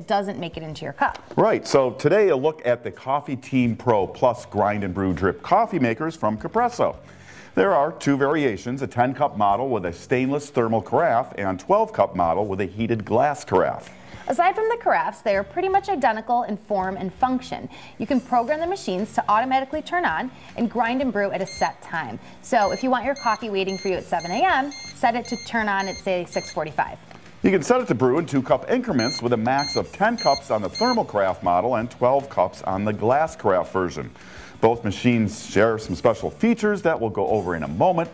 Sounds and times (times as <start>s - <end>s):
Music: 0.0s - 38.1s.